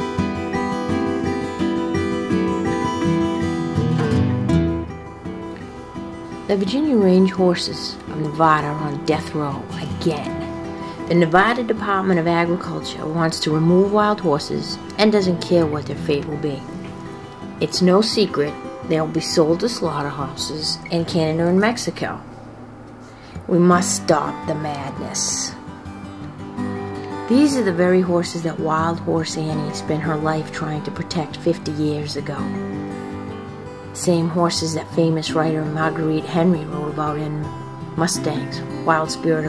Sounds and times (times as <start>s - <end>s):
Music: 0.0s - 39.4s
Speech: 6.5s - 16.8s, 17.6s - 22.2s, 23.5s - 25.6s, 27.3s - 32.5s, 34.0s - 39.4s.